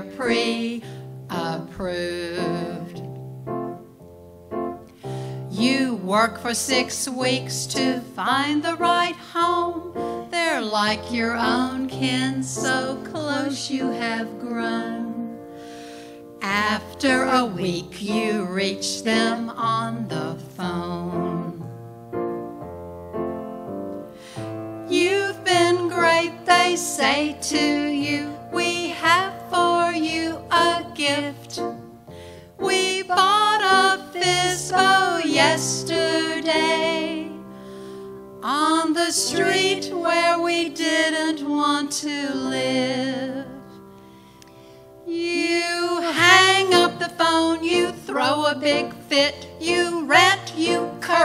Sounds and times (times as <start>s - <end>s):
Christian music: 0.0s - 51.2s
Christmas music: 0.0s - 51.2s.